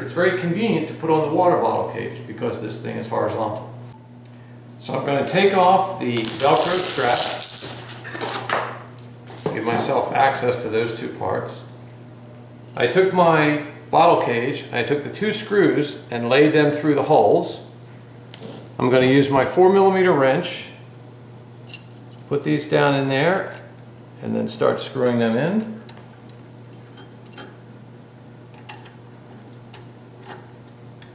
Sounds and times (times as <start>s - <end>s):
Speech: 0.0s - 3.8s, 4.8s - 7.4s, 9.4s - 11.7s, 12.8s - 17.7s, 18.8s - 20.8s, 22.3s - 23.6s, 24.2s - 25.8s.